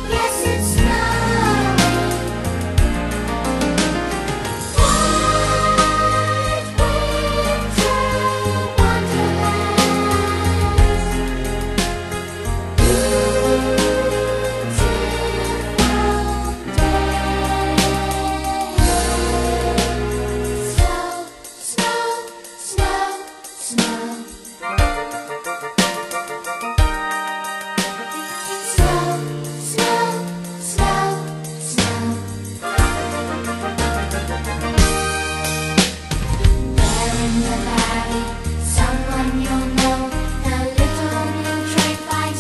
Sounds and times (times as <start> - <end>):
Music: 0.0 - 42.4.